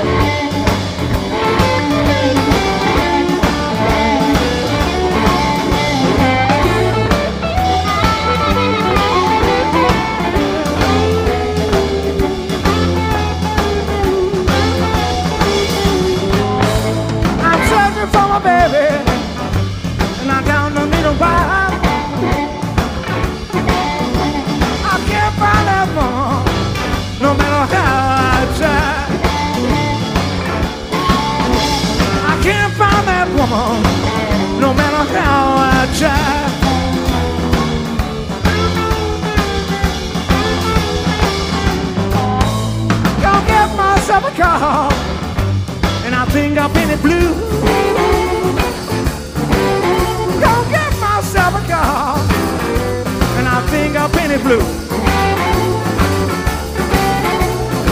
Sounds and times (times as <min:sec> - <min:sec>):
Rock and roll: 0:00.0 - 0:57.9.